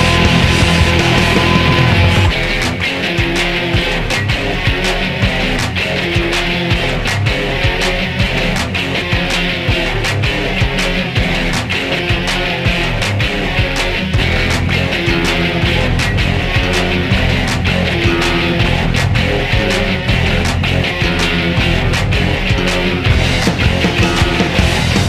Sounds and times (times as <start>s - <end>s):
Music: 0.0s - 25.0s.